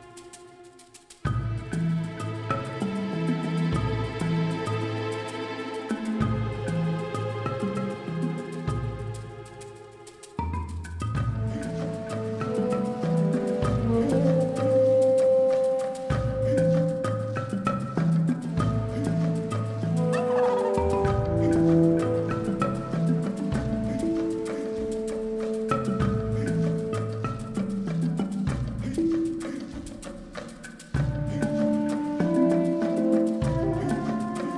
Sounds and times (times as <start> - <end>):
Music: 0.0 - 34.5.